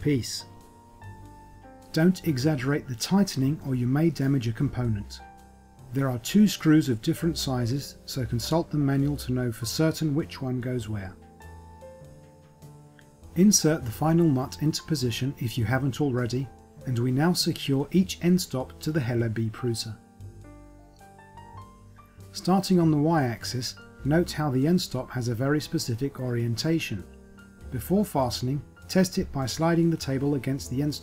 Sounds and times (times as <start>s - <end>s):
Speech: 0.0s - 0.5s, 1.9s - 5.2s, 5.9s - 11.2s, 13.4s - 20.0s, 22.4s - 27.1s, 27.7s - 31.0s
Music: 0.0s - 31.0s.